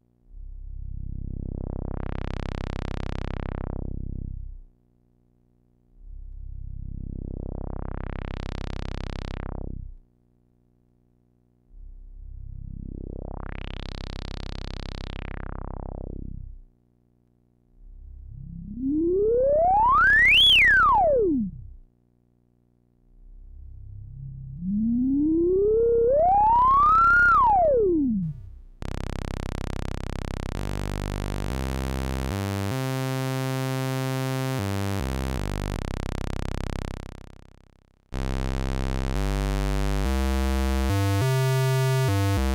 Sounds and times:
Synthesizer: 0:18.2 - 0:21.8, 0:23.7 - 0:29.4.

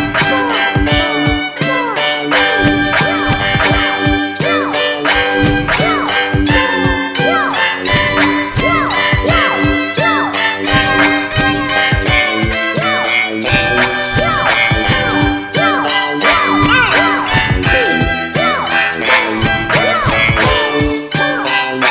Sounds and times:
Music: 0:00.0 - 0:21.9.

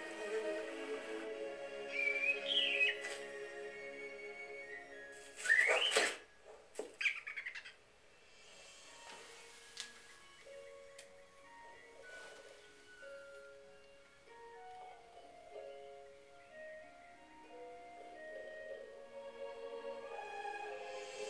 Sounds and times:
Music: 0:00.0 - 0:06.4, 0:08.2 - 0:21.3
Inside, small room: 0:00.0 - 0:21.3.

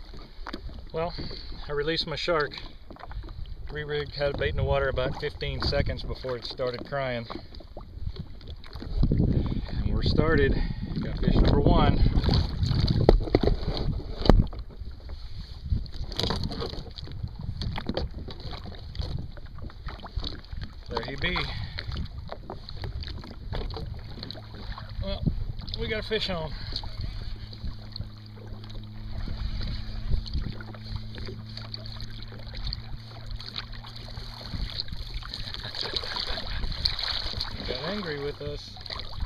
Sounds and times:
Rowboat, canoe, kayak: 0:00.0 - 0:39.2
Speech: 0:03.7 - 0:07.3, 0:25.8 - 0:26.6, 0:37.6 - 0:38.7.

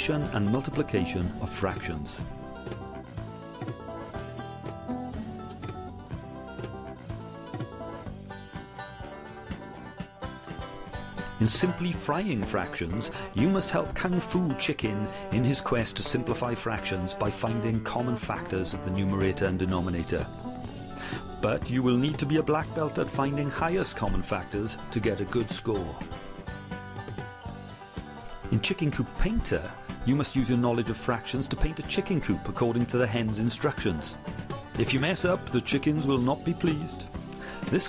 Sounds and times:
Speech: 0:00.0 - 0:02.3, 0:11.3 - 0:20.3, 0:21.4 - 0:26.1, 0:28.5 - 0:34.2, 0:34.8 - 0:37.1
Music: 0:00.0 - 0:37.8.

